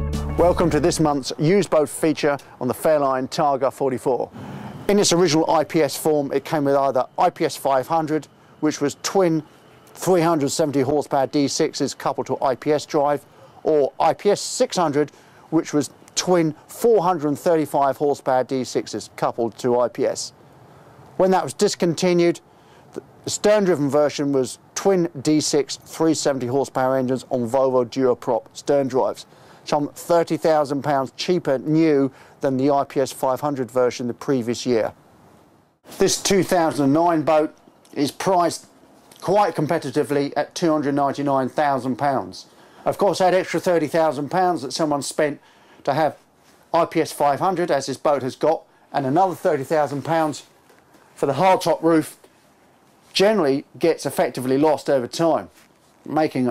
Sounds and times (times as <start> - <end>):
Speech: 0.4 - 20.4, 21.2 - 35.0, 35.9 - 50.5, 51.2 - 52.2, 53.1 - 56.5.